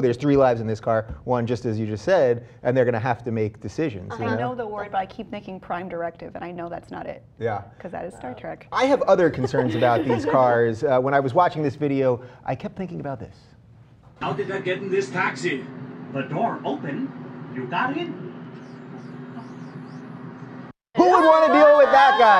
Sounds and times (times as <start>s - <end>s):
Speech: 0.0s - 5.2s.